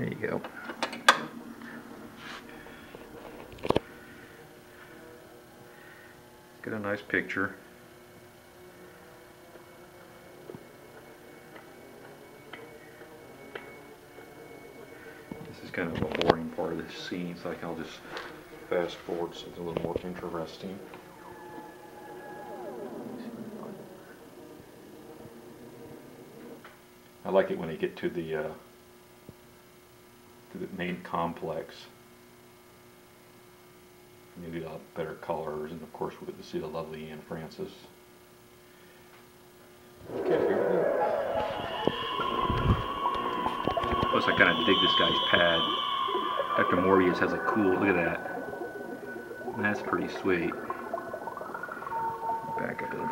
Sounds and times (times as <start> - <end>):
Speech: 0.0 - 0.5, 6.6 - 7.6, 15.4 - 20.9, 27.2 - 28.6, 30.5 - 32.0, 34.4 - 38.0, 40.2 - 41.2, 44.1 - 45.8, 46.6 - 48.3, 49.6 - 50.6, 52.5 - 53.1
Television: 0.0 - 30.5, 37.9 - 44.2, 45.0 - 53.1.